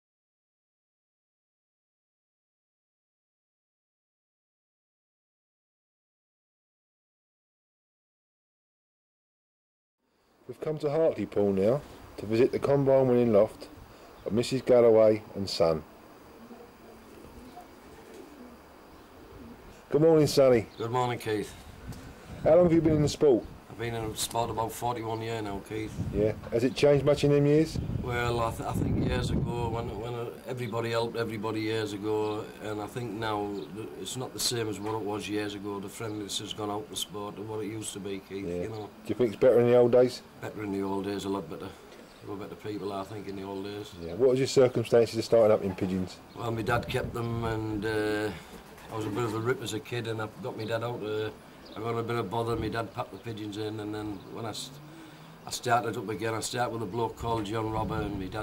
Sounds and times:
Speech: 10.5s - 13.7s, 14.3s - 15.9s, 19.9s - 21.6s, 22.4s - 54.8s, 55.5s - 58.4s.

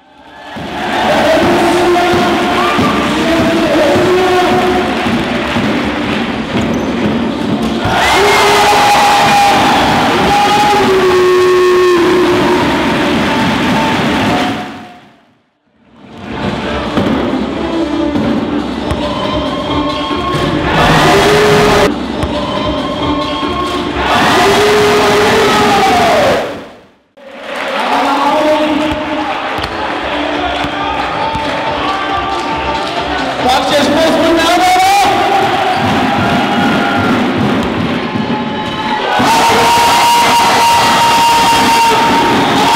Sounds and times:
Music: 0.0s - 26.4s, 27.2s - 42.7s
Speech: 1.0s - 5.0s, 27.7s - 29.4s, 30.3s - 35.5s.

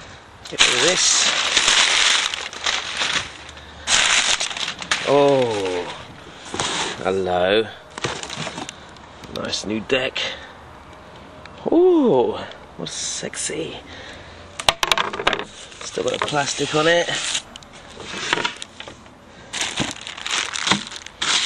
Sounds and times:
Speech: 5.1s - 6.1s, 9.3s - 10.4s, 11.6s - 13.9s, 15.8s - 17.2s.

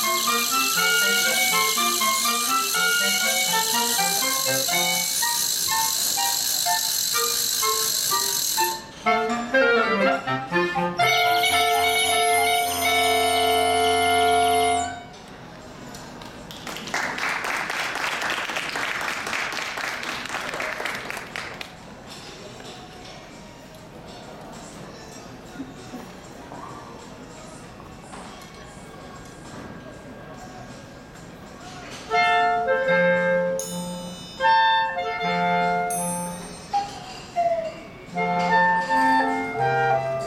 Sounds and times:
Clarinet: 0.0s - 15.2s, 31.9s - 40.2s.

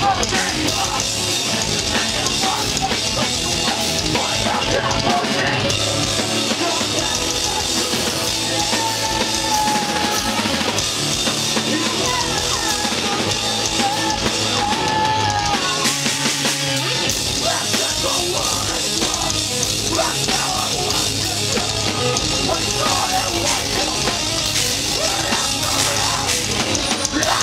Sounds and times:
Music: 0.0s - 27.4s.

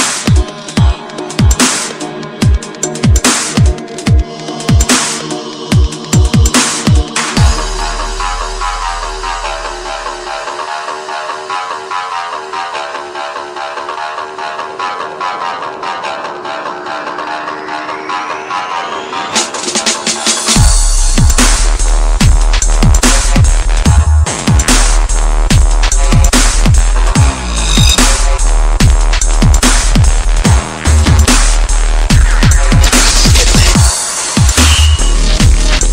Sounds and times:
Dubstep: 0.0s - 35.9s.

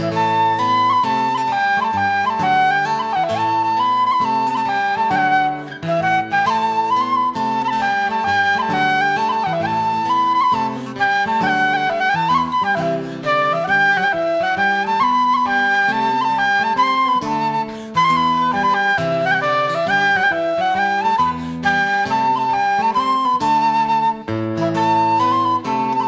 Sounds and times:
Music: 0.0s - 26.0s.

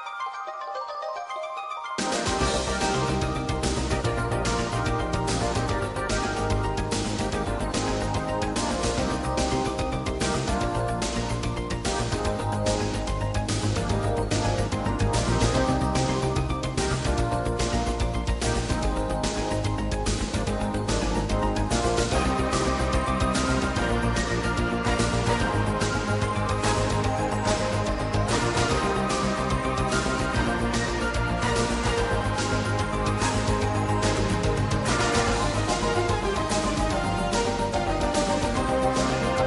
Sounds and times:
Pop music: 2.0s - 39.4s.

